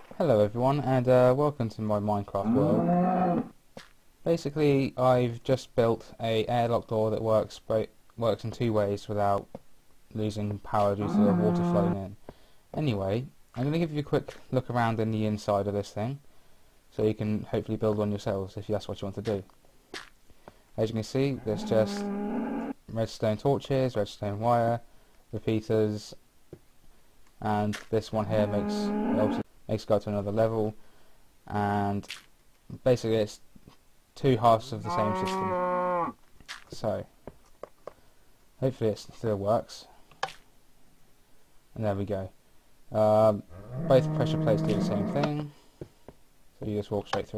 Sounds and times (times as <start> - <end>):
Speech: 0.2 - 2.8, 4.2 - 9.5, 10.1 - 12.2, 12.8 - 16.2, 16.9 - 19.5, 20.8 - 22.1, 22.9 - 26.2, 27.4 - 30.8, 31.5 - 32.1, 32.7 - 33.5, 34.2 - 35.6, 36.7 - 37.1, 38.6 - 39.9, 41.8 - 45.6, 46.6 - 47.3.